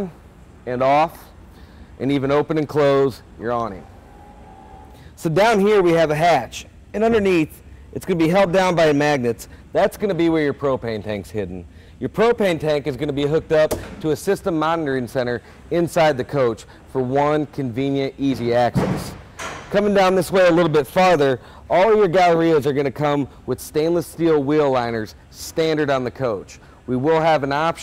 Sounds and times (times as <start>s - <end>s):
Speech: 0.0s - 1.4s, 2.0s - 3.9s, 5.2s - 27.8s.